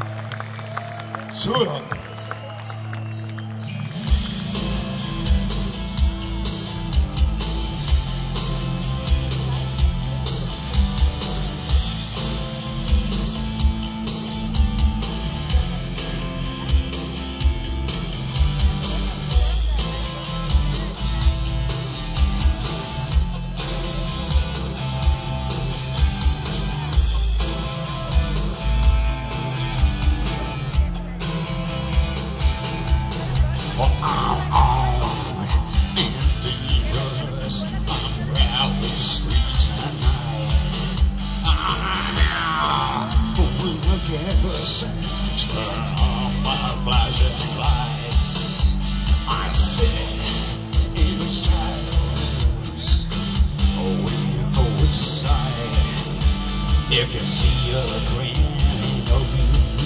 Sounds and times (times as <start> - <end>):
Music: 0.0 - 59.8
Speech: 1.3 - 2.0, 18.6 - 21.4, 30.0 - 32.0, 32.7 - 56.2, 56.9 - 59.8.